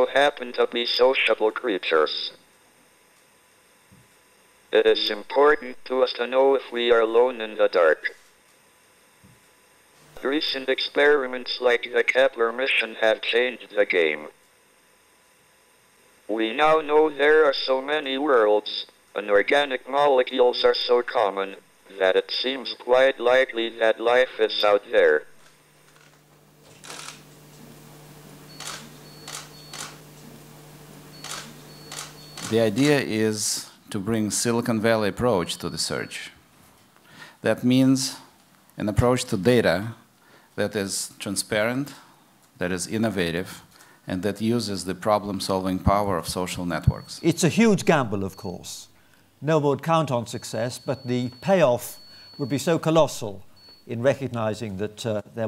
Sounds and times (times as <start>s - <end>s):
Radio: 0.0s - 2.4s, 4.7s - 8.3s, 10.0s - 14.4s, 16.3s - 25.4s, 26.7s - 33.7s
Speech: 0.0s - 2.4s, 4.7s - 8.2s, 10.2s - 14.4s, 16.3s - 25.3s, 32.4s - 36.4s, 37.4s - 55.4s.